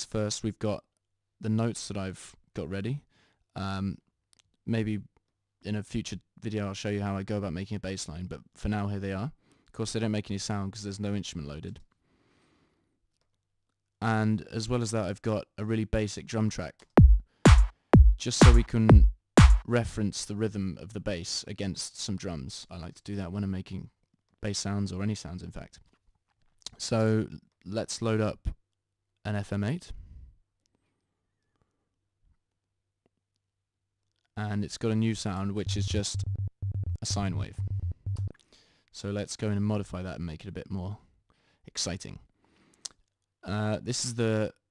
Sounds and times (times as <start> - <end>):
Speech: 0.0 - 4.0, 4.6 - 11.9, 14.0 - 16.8, 18.2 - 19.1, 19.7 - 25.8, 26.7 - 28.6, 29.2 - 30.0, 34.4 - 36.2, 37.0 - 37.6, 39.0 - 41.1, 41.7 - 42.3, 43.4 - 44.7
Electronic music: 17.0 - 19.7, 35.6 - 38.3.